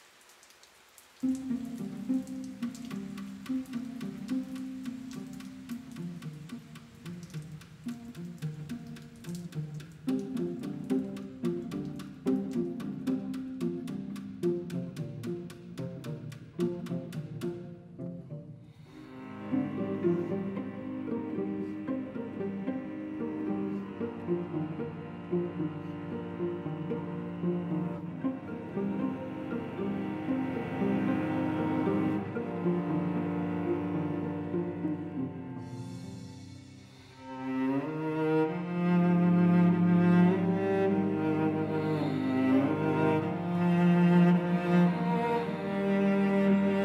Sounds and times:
Cello: 1.2s - 46.8s.

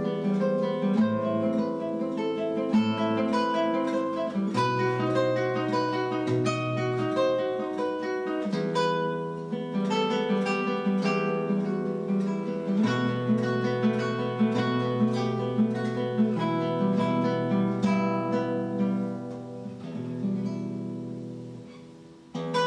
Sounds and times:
Acoustic guitar: 0.0s - 22.6s
Strum: 0.0s - 22.6s.

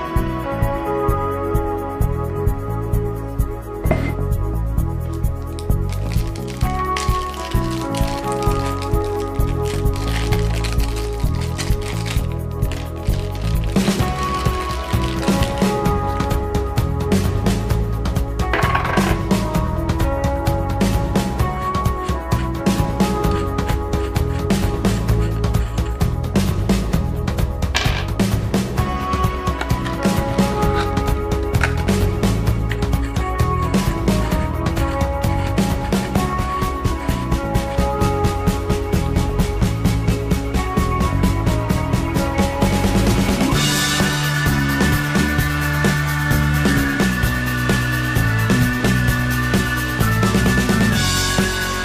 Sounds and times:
Music: 0.0s - 51.8s.

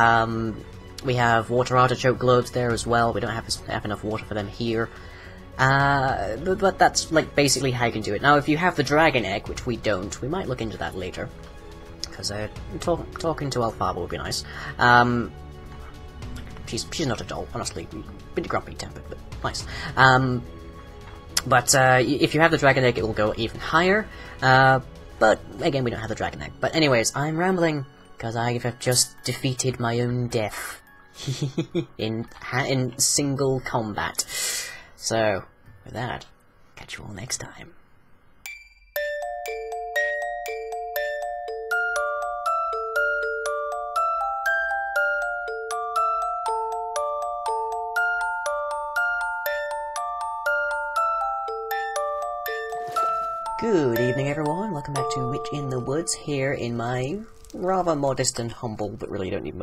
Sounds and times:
Glockenspiel: 38.4s - 57.9s.

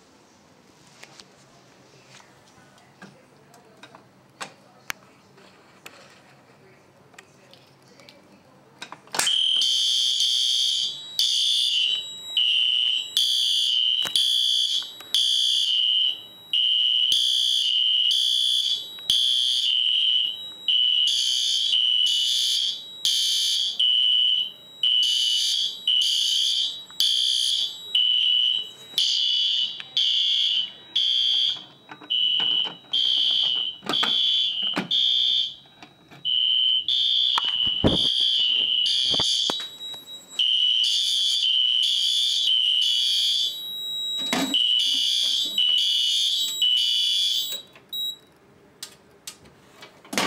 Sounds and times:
Fire alarm: 9.2s - 48.3s
Smoke detector, smoke alarm: 9.2s - 48.3s.

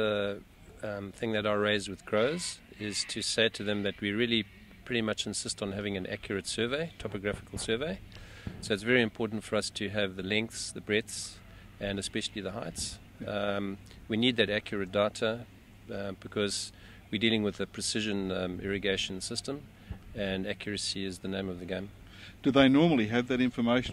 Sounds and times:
Speech: 8.7s - 19.6s, 20.2s - 23.9s.

